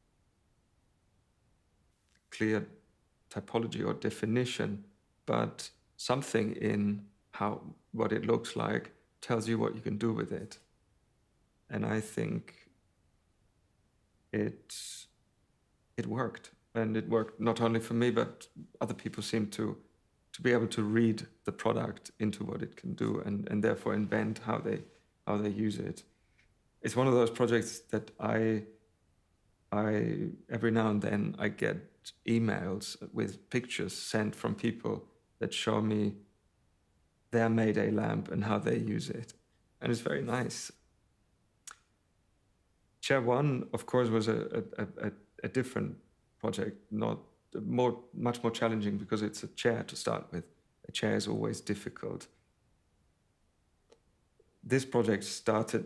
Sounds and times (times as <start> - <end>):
Speech: 2.4 - 10.7, 11.7 - 12.7, 14.4 - 15.1, 16.0 - 19.8, 20.4 - 26.1, 26.8 - 28.7, 29.8 - 36.2, 37.4 - 40.8, 43.0 - 52.4, 54.7 - 55.8.